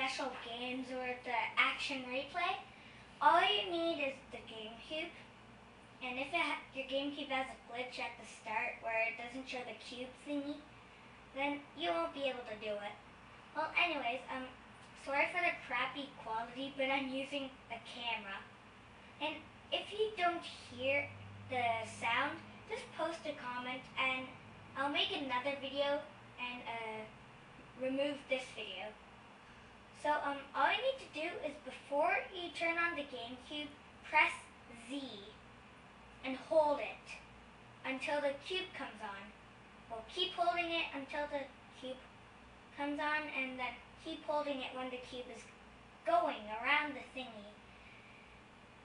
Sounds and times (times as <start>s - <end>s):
Speech: 0.0s - 5.3s, 6.0s - 10.7s, 11.3s - 18.5s, 19.2s - 29.0s, 30.0s - 35.4s, 36.2s - 42.1s, 42.7s - 47.6s.